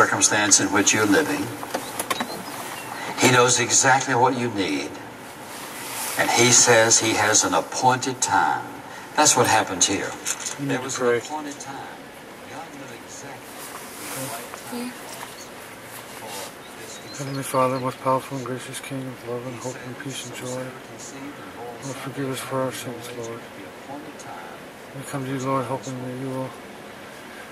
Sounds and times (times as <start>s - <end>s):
Speech: 0.0s - 1.6s, 3.1s - 5.0s, 6.2s - 13.5s, 14.1s - 15.5s, 16.2s - 26.6s
Bird: 0.0s - 3.9s, 14.9s - 20.6s.